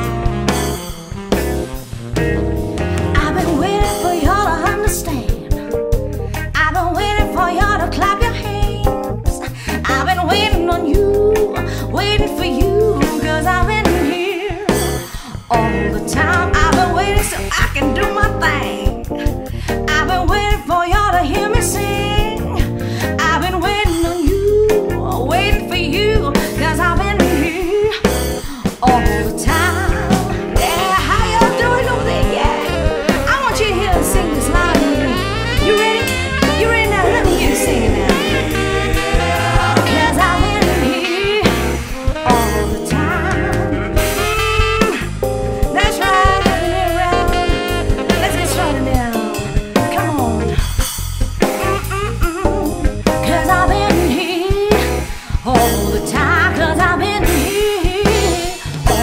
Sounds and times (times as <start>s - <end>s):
Music: 0.0s - 59.0s
Female singing: 3.2s - 5.5s, 6.6s - 9.0s, 9.8s - 14.8s, 15.5s - 18.9s, 19.9s - 22.4s, 23.2s - 28.1s, 28.7s - 41.5s, 42.2s - 43.6s, 45.8s - 50.4s, 53.2s - 59.0s.